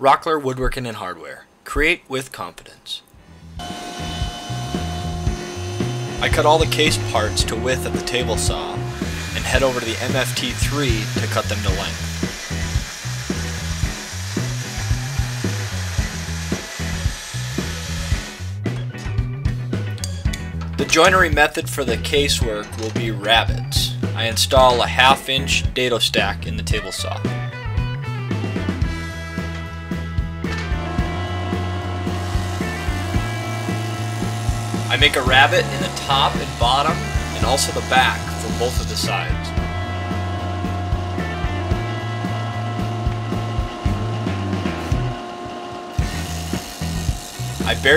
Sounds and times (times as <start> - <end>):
Speech: 0.0 - 3.1, 6.2 - 12.0, 20.8 - 27.3, 34.9 - 39.6, 47.6 - 47.9
Music: 3.2 - 47.9.